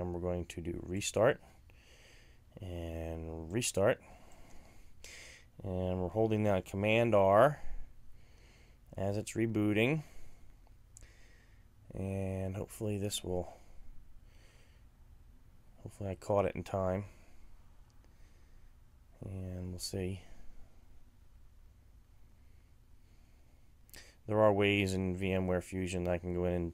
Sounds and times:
Speech: 0.0 - 1.4, 2.6 - 4.0, 5.6 - 7.6, 9.0 - 10.1, 11.9 - 13.6, 15.8 - 17.2, 19.2 - 20.3, 24.3 - 26.7.

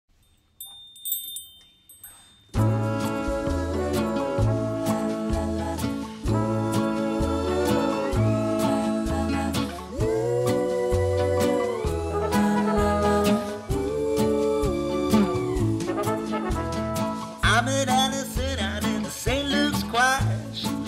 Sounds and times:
Music: 2.5 - 20.8.

